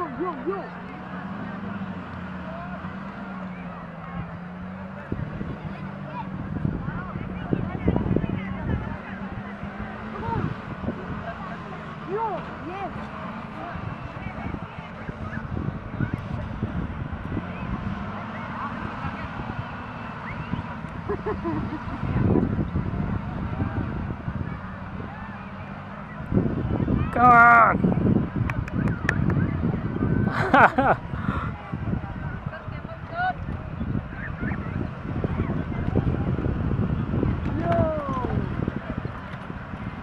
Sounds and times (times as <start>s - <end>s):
Truck: 0.0s - 40.0s.